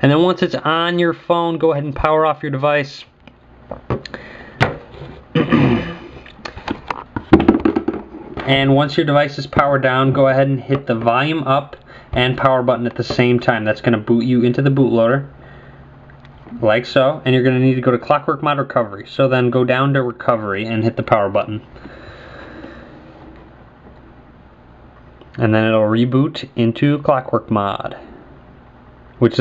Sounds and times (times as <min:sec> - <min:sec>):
Speech: 0:00.0 - 0:03.1, 0:08.4 - 0:15.3, 0:16.5 - 0:21.7, 0:25.4 - 0:28.2, 0:29.2 - 0:29.4
Inside, small room: 0:00.0 - 0:29.4.